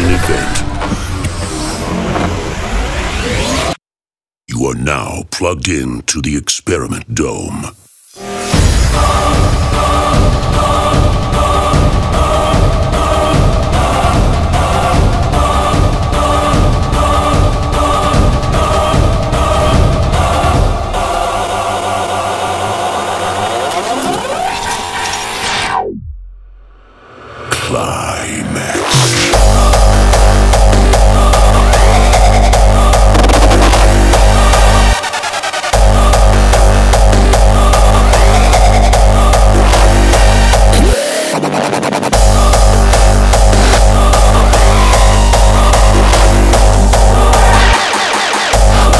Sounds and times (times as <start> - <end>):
Music: 8.1 - 48.9.